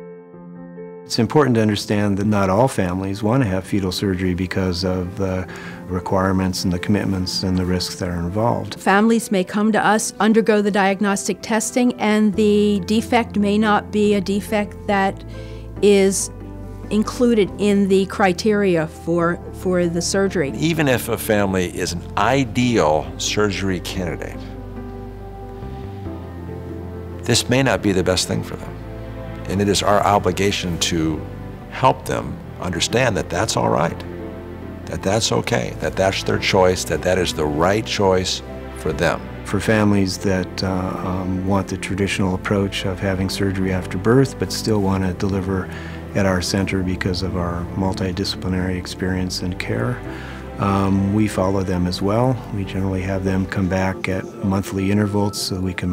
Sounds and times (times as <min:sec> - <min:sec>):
Music: 0:00.0 - 0:55.9
Speech: 0:01.1 - 0:15.2, 0:15.8 - 0:16.3, 0:16.9 - 0:24.5, 0:27.2 - 0:28.7, 0:29.5 - 0:31.2, 0:31.8 - 0:34.0, 0:34.9 - 0:50.0, 0:50.6 - 0:55.9.